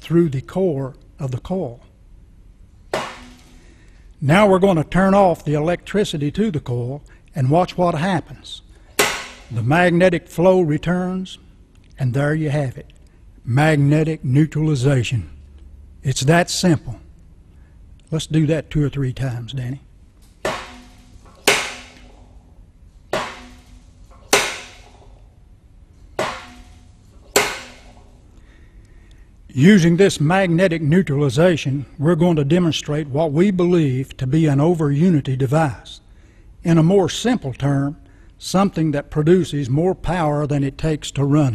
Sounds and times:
Speech: 0:00.0 - 0:01.9, 0:04.2 - 0:08.6, 0:09.6 - 0:11.4, 0:12.0 - 0:12.9, 0:13.5 - 0:15.4, 0:16.0 - 0:17.1, 0:18.1 - 0:19.9, 0:29.5 - 0:36.0, 0:36.6 - 0:41.5.

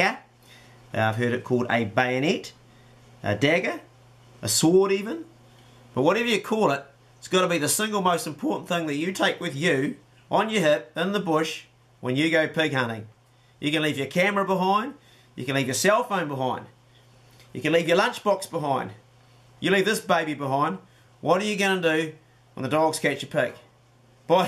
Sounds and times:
Speech: 0:00.0 - 0:00.3, 0:00.9 - 0:02.6, 0:03.2 - 0:05.3, 0:06.0 - 0:16.8, 0:17.5 - 0:19.0, 0:19.6 - 0:23.7.

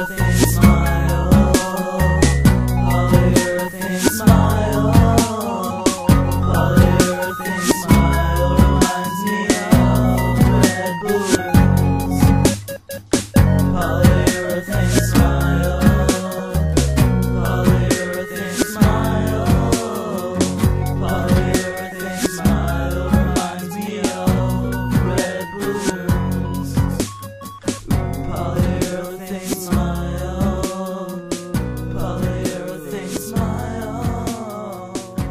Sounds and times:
Soul music: 0:00.0 - 0:35.3.

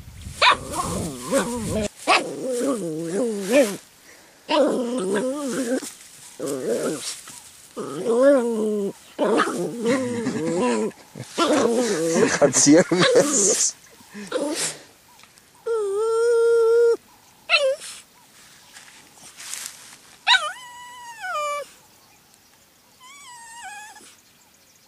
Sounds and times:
Speech: 0:12.1 - 0:13.8.

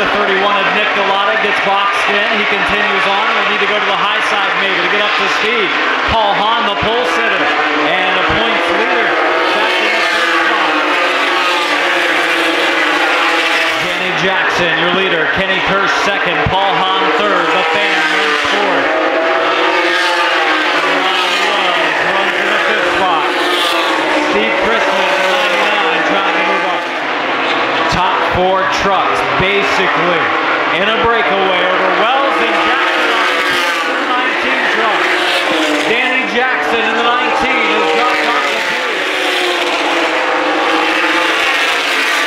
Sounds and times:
Speech: 0:00.0 - 0:10.0, 0:13.8 - 0:18.8, 0:20.9 - 0:23.4, 0:24.3 - 0:26.8, 0:27.9 - 0:35.1, 0:35.8 - 0:38.8
Car: 0:00.0 - 0:42.2.

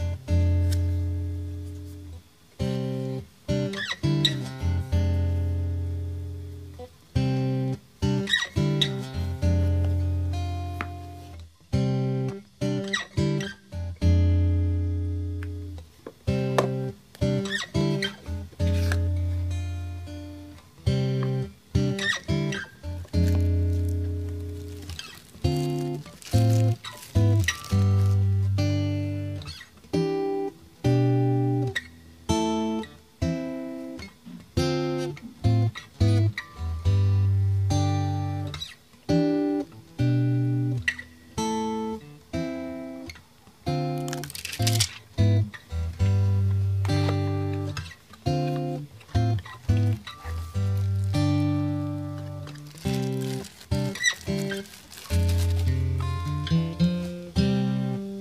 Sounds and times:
Music: 0:00.0 - 0:58.2.

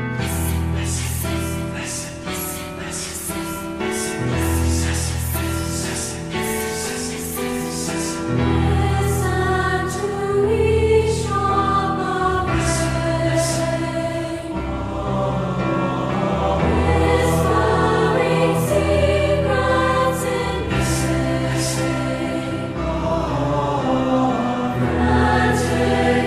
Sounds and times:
Music: 0:00.0 - 0:26.2.

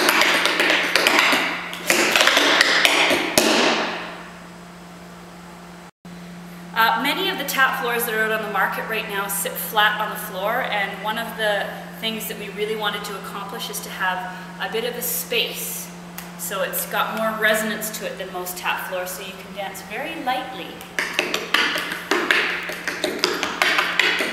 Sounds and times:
Speech: 0:06.8 - 0:20.8.

